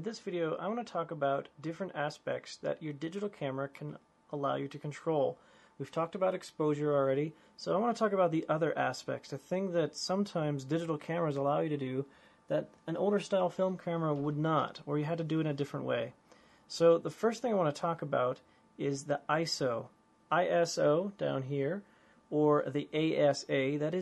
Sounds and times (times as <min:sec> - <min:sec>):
Speech: 0:00.0 - 0:24.0.